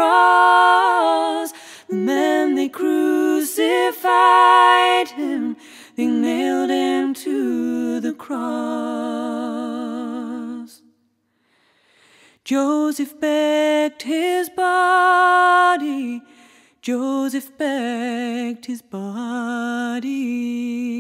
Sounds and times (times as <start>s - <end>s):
Singing: 0.0s - 10.9s.